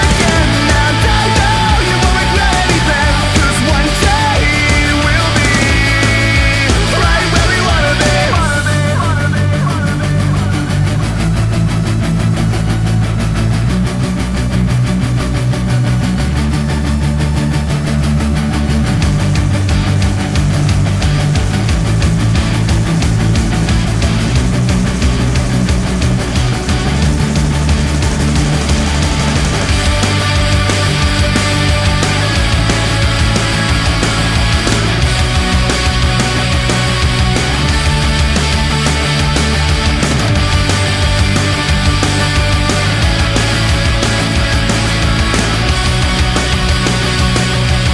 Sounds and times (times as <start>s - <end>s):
Angry music: 0.0s - 47.9s.